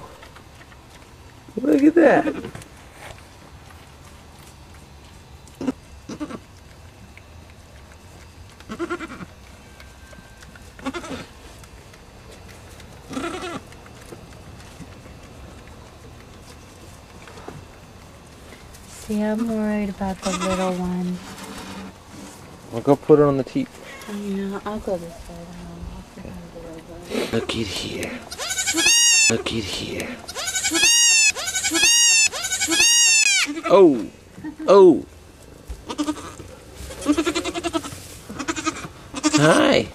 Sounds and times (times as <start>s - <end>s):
Bleat: 5.6s - 6.4s, 8.7s - 9.3s, 10.8s - 11.3s, 13.1s - 13.6s, 20.2s - 20.8s, 28.3s - 29.3s, 30.3s - 33.7s, 35.9s - 36.4s, 37.0s - 39.6s.